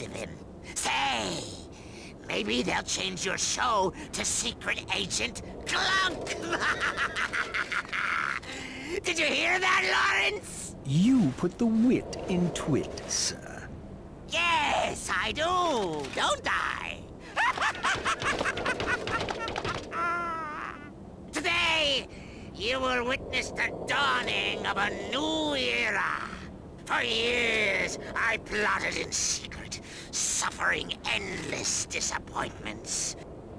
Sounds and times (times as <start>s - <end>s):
Speech: 0.0s - 6.4s, 9.0s - 13.7s, 14.3s - 17.1s, 21.4s - 33.2s.